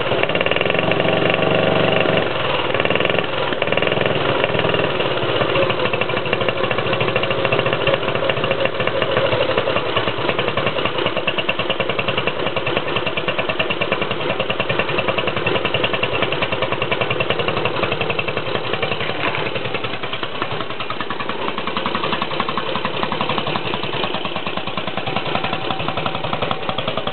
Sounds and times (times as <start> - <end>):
Motorcycle: 0.0 - 27.1.